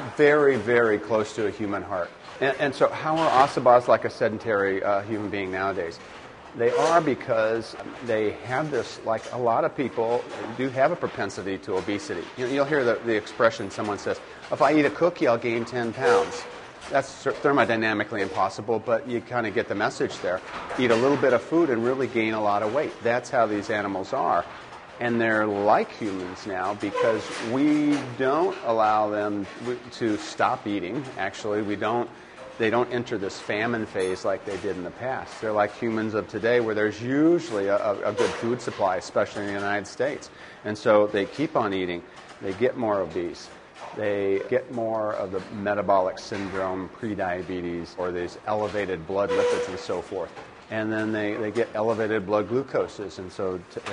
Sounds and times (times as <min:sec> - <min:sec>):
Speech: 0:00.0 - 0:53.9.